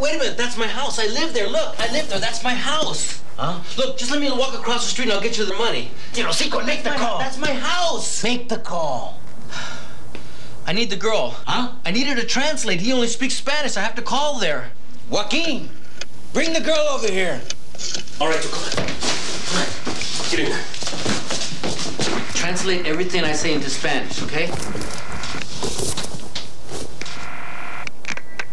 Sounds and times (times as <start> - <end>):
Speech: 0.0 - 9.2, 10.7 - 15.7, 22.4 - 24.6
Inside, small room: 0.0 - 28.5.